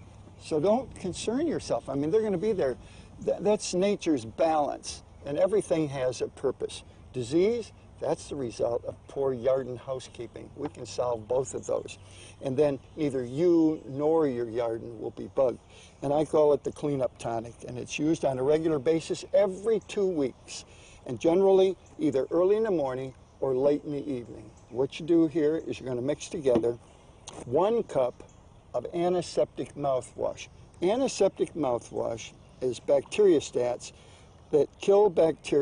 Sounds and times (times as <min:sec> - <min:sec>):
Speech: 0:00.4 - 0:35.6.